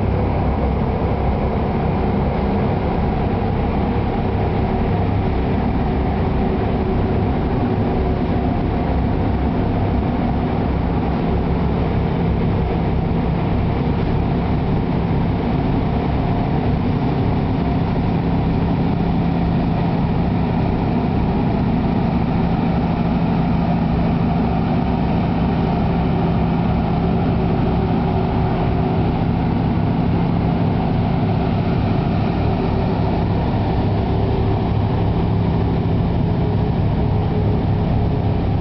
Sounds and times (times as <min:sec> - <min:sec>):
Truck: 0:00.0 - 0:38.6.